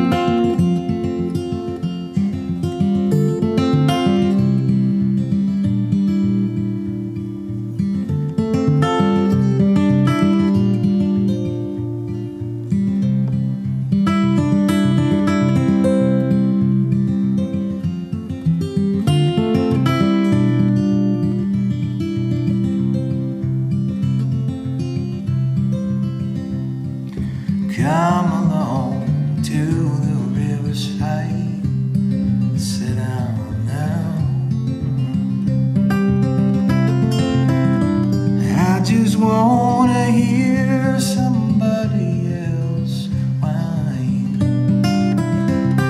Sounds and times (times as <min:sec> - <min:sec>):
Music: 0:00.0 - 0:45.8.